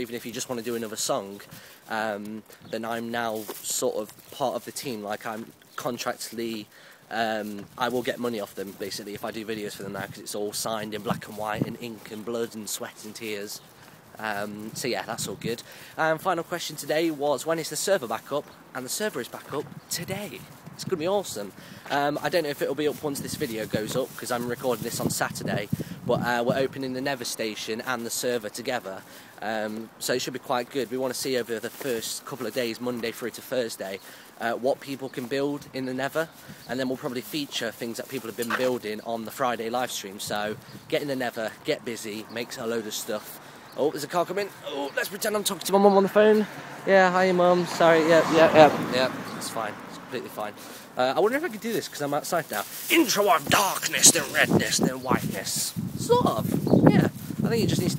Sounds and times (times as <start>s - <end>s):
Speech: 0.0s - 13.6s, 14.2s - 57.9s
Outside, urban or manmade: 0.0s - 57.9s.